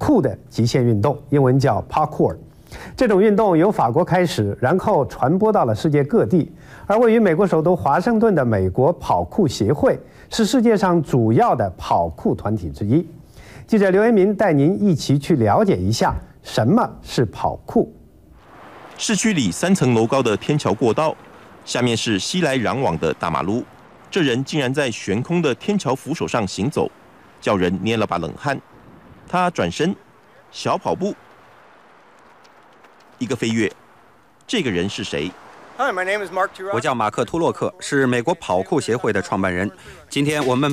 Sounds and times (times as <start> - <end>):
Speech: 0.0 - 2.4, 3.0 - 18.0, 19.0 - 28.6, 29.3 - 31.2, 33.2 - 33.8, 34.5 - 40.7
Outside, urban or manmade: 0.0 - 40.7.